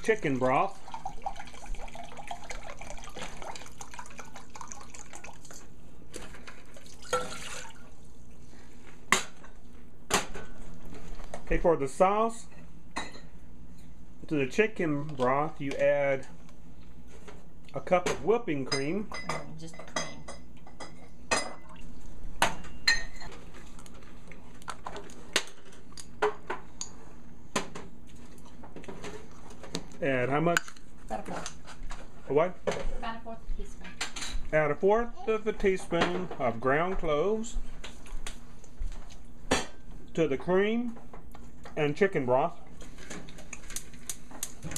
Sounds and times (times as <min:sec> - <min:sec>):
Liquid: 0:00.0 - 0:05.8, 0:06.5 - 0:08.1.